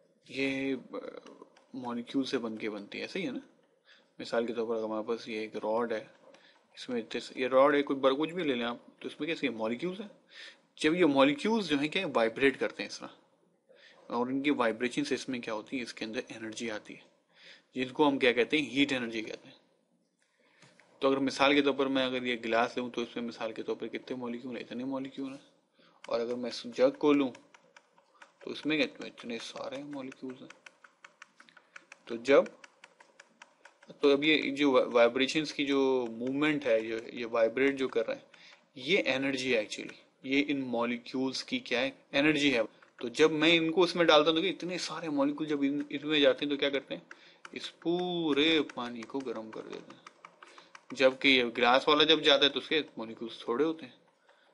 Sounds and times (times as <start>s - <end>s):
Speech: 0.3s - 3.5s, 4.2s - 6.2s, 6.8s - 10.2s, 10.8s - 13.2s, 14.1s - 17.1s, 17.8s - 19.6s, 21.0s - 25.5s, 26.1s - 27.4s, 28.4s - 30.6s, 32.1s - 32.6s, 33.9s - 50.0s, 50.9s - 54.0s
Computer keyboard: 1.2s - 2.2s, 26.0s - 38.8s, 42.4s - 53.4s.